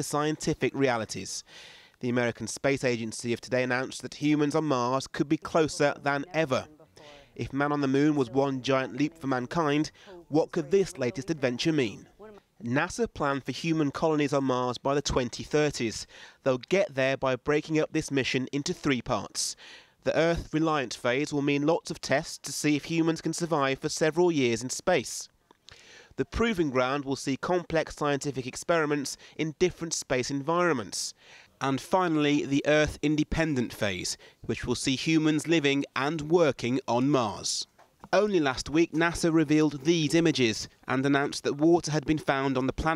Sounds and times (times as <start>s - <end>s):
Speech: 0.0s - 1.4s, 2.0s - 25.3s, 26.2s - 42.9s.